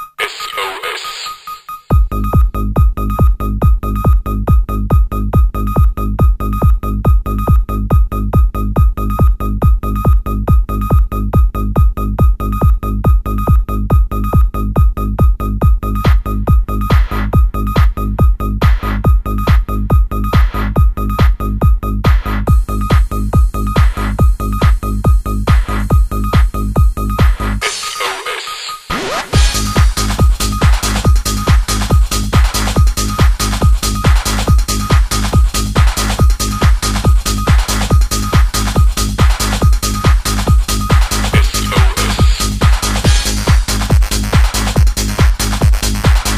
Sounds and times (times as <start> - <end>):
Music: 0.0 - 46.3.